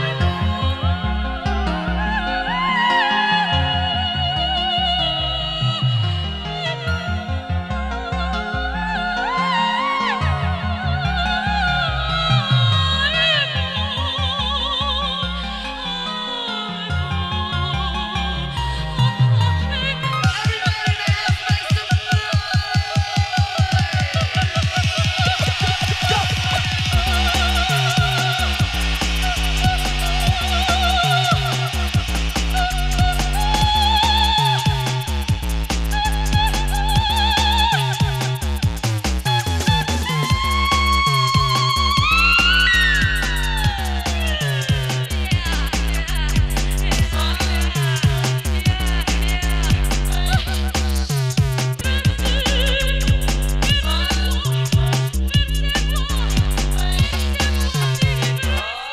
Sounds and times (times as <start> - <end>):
Disco: 19.6 - 58.9.